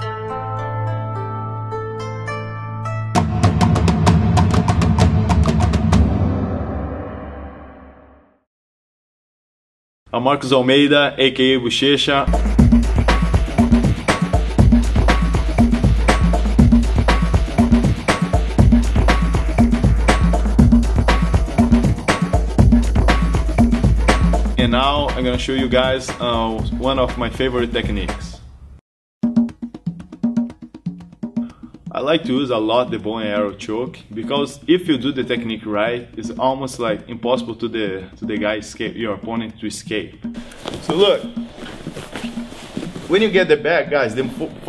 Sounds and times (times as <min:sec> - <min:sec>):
Music: 0:00.0 - 0:08.5, 0:12.2 - 0:28.5, 0:29.2 - 0:44.6
Speech: 0:10.1 - 0:12.3, 0:24.6 - 0:28.4, 0:31.9 - 0:40.2, 0:40.9 - 0:41.3, 0:43.1 - 0:44.6.